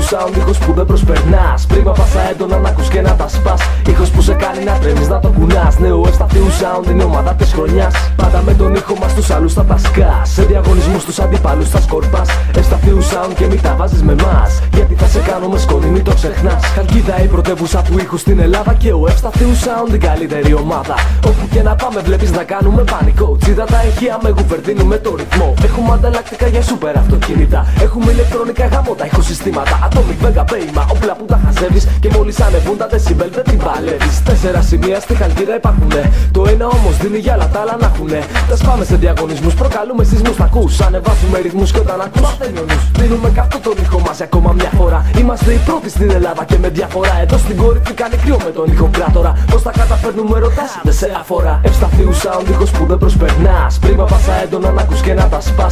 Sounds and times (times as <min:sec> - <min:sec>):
Music: 0:00.0 - 0:55.7.